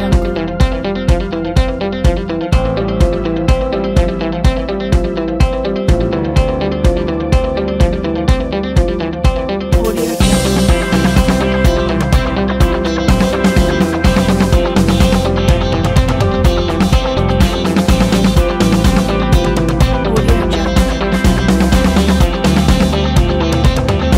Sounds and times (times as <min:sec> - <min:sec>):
Background music: 0:00.0 - 0:24.1.